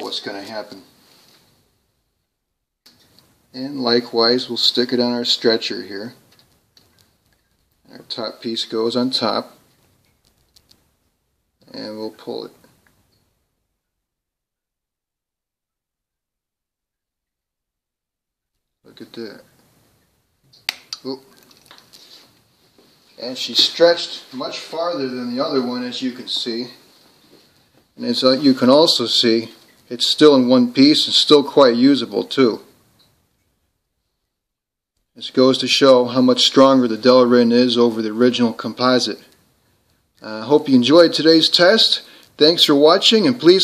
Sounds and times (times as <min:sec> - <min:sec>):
Speech: 0:00.0 - 0:00.9, 0:03.5 - 0:06.2, 0:07.9 - 0:09.6, 0:11.6 - 0:12.6, 0:18.9 - 0:19.5, 0:21.0 - 0:21.3, 0:23.2 - 0:26.8, 0:28.0 - 0:32.7, 0:35.2 - 0:39.3, 0:40.2 - 0:43.6
Inside, small room: 0:00.0 - 0:43.6.